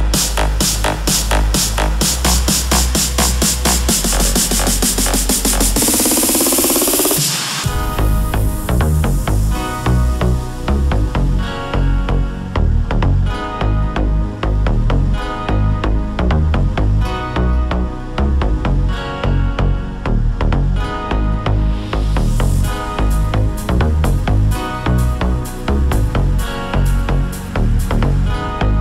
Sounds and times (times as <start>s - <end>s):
Dance music: 0.0s - 28.8s
Electronic dance music: 0.0s - 28.8s
Electronica: 0.0s - 28.8s.